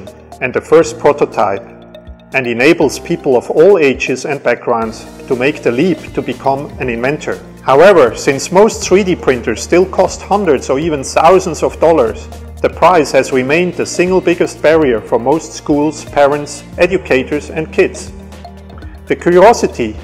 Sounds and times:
Speech: 0.0 - 1.7, 2.4 - 18.2, 19.1 - 20.0
Music: 0.0 - 20.0.

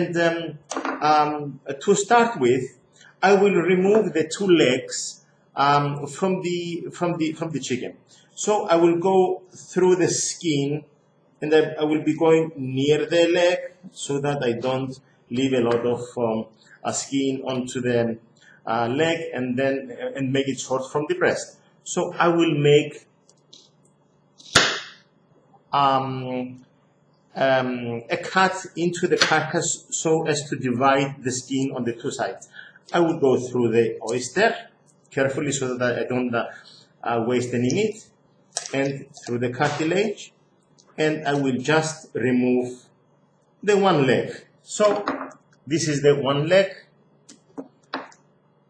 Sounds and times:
Speech: 0.0 - 23.1, 25.7 - 26.7, 27.3 - 43.0, 43.6 - 47.4.

